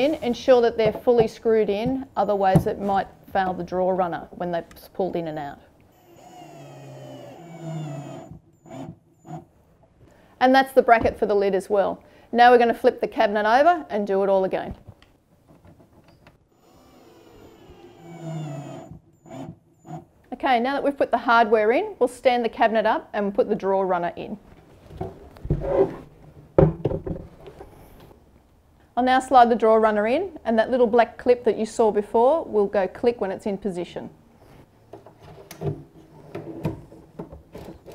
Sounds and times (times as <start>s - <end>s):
Speech: 0.0s - 5.7s, 10.4s - 14.8s, 20.3s - 24.4s, 29.0s - 34.2s.